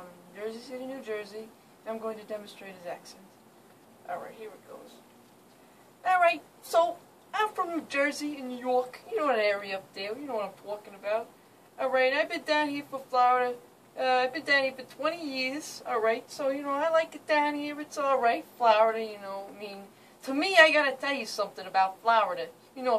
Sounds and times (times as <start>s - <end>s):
Speech: 0.0s - 3.3s, 4.0s - 5.0s, 6.0s - 22.9s.